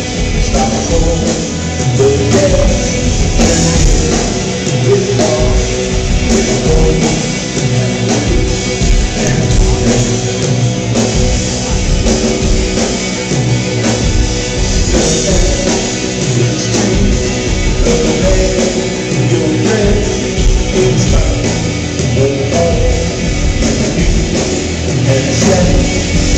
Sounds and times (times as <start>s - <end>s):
Music: 0.0s - 26.3s.